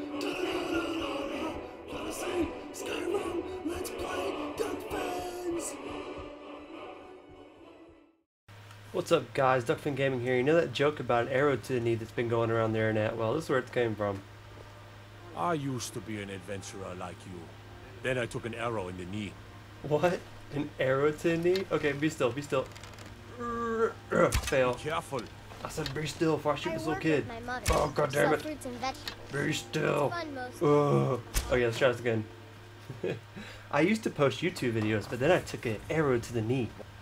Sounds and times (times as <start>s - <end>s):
Speech: 9.0s - 14.2s, 23.4s - 32.3s, 33.8s - 36.8s.